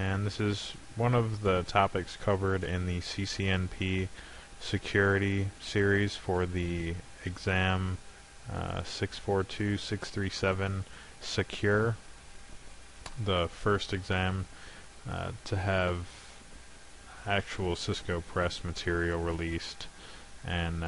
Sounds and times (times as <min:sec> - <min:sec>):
Hum: 0:00.0 - 0:20.8
Mains hum: 0:00.0 - 0:20.8.